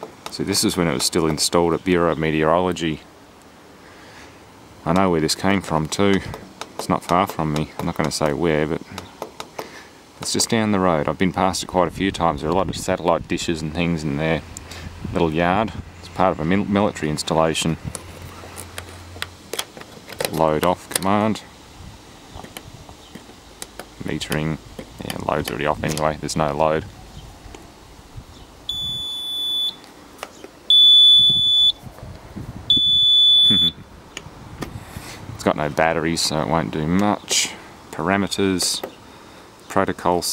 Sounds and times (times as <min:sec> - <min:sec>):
Speech: 0:00.3 - 0:03.1, 0:04.8 - 0:09.0, 0:10.2 - 0:14.5, 0:15.1 - 0:17.9, 0:20.2 - 0:21.5, 0:24.0 - 0:26.9, 0:35.4 - 0:38.9, 0:39.7 - 0:40.3
Beep, bleep: 0:28.7 - 0:29.8, 0:30.7 - 0:31.8, 0:32.7 - 0:33.8.